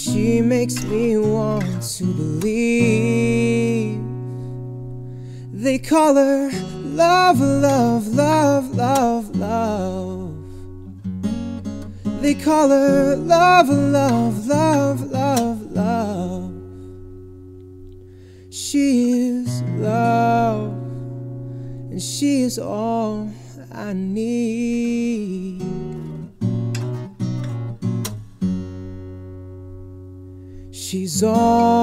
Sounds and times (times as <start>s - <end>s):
Acoustic guitar: 0.0s - 31.8s.